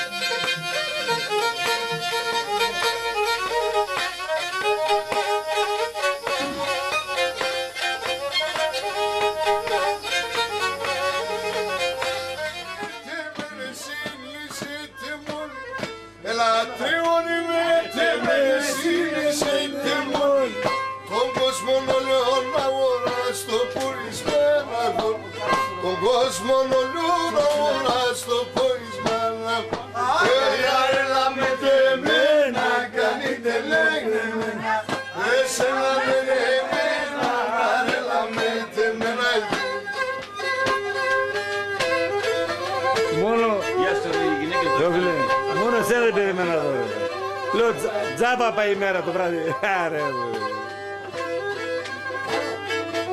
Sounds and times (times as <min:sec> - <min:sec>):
Traditional music: 0:00.0 - 0:53.1.